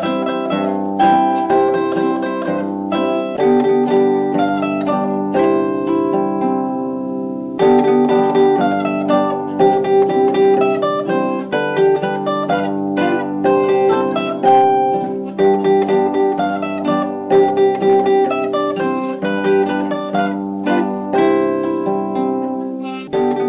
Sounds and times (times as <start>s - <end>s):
Pizzicato: 0.0s - 23.4s
Zither: 0.0s - 23.4s.